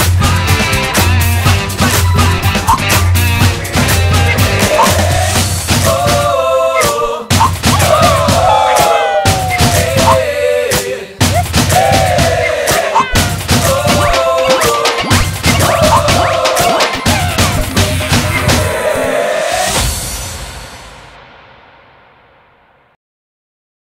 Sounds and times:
Music: 0:00.0 - 0:23.0.

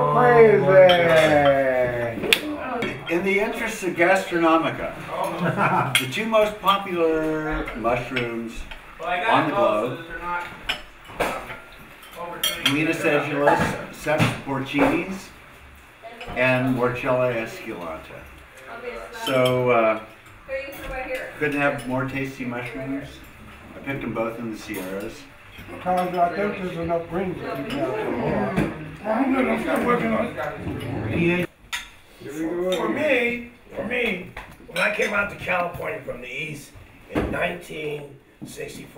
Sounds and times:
Inside, small room: 0:00.0 - 0:38.9.

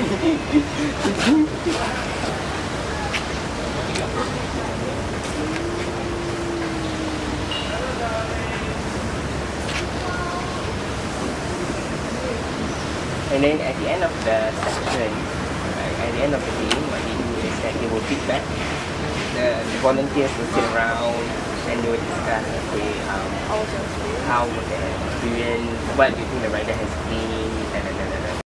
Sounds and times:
Speech: 0:19.4 - 0:28.4.

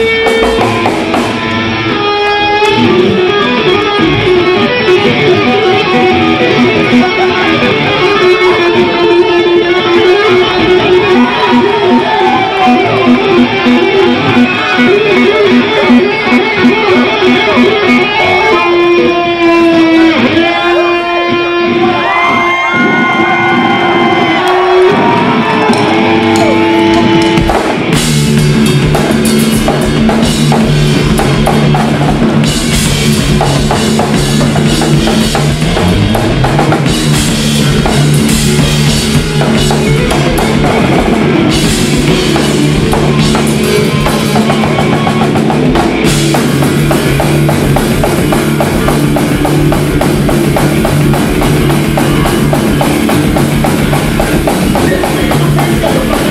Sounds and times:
Music: 0:00.0 - 0:56.3.

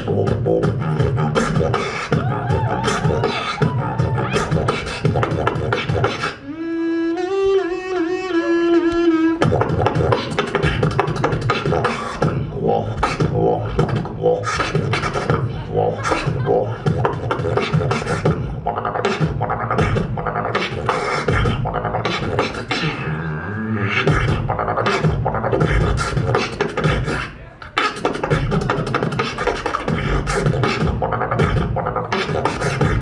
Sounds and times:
Beatboxing: 0:00.0 - 0:33.0.

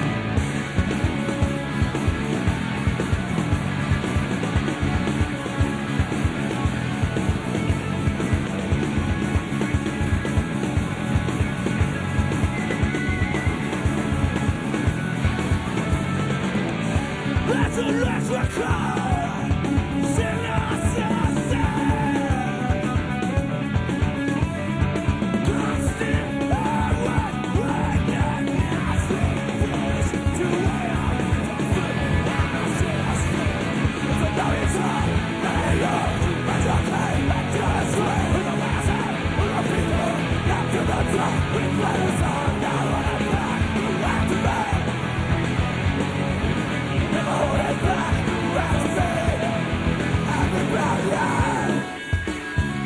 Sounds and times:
Music: 0:00.0 - 0:52.8.

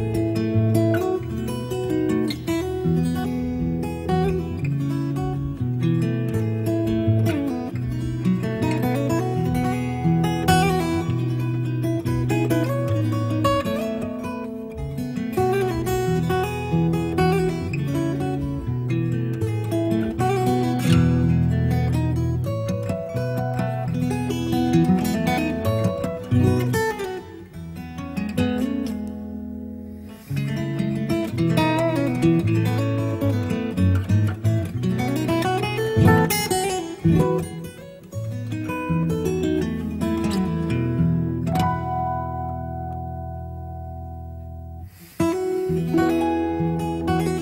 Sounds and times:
Acoustic guitar: 0:00.0 - 0:47.4
Strum: 0:00.0 - 0:47.4.

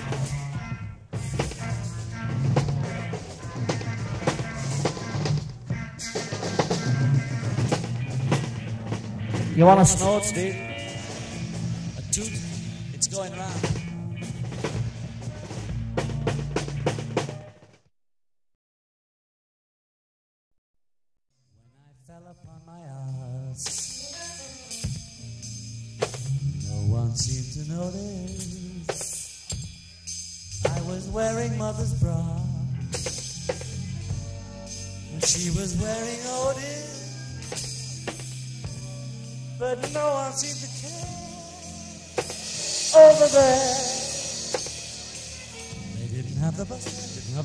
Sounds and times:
Vocal music: 0:00.0 - 0:14.4, 0:26.2 - 0:29.3, 0:30.5 - 0:38.1, 0:39.6 - 0:47.4.

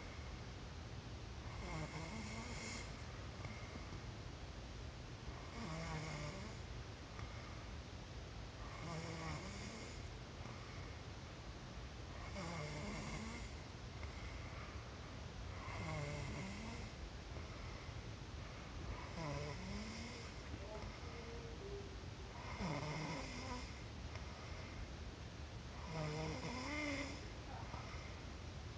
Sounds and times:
Inside, small room: 0:00.0 - 0:28.7
Snort: 0:01.6 - 0:02.9, 0:12.3 - 0:13.6, 0:22.4 - 0:23.8, 0:25.8 - 0:27.2.

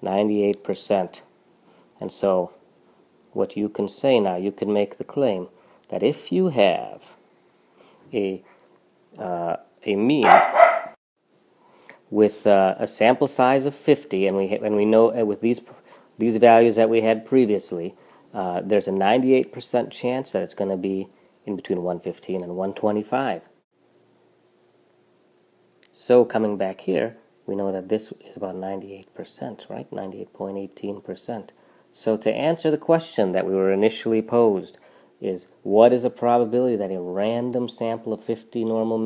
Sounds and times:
Bow-wow: 0:10.2 - 0:11.0.

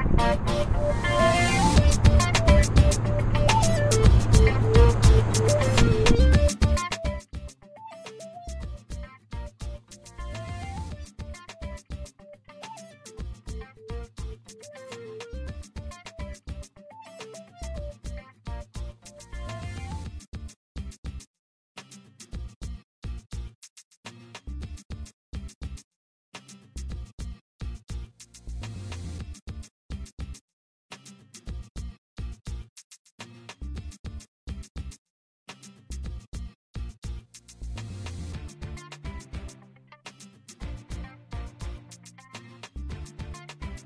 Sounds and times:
Music: 0:00.0 - 0:25.8, 0:26.4 - 0:43.8.

